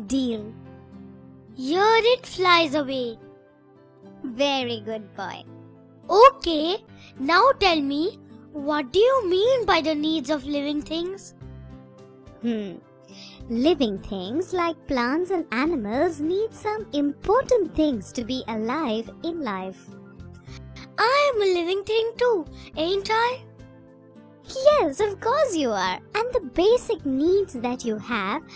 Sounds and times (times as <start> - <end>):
Child speech, kid speaking: 0.0 - 0.6, 1.6 - 3.2, 4.2 - 5.4, 6.1 - 11.3, 13.5 - 19.8, 20.8 - 23.4, 24.5 - 28.5
Music for children: 0.0 - 28.5.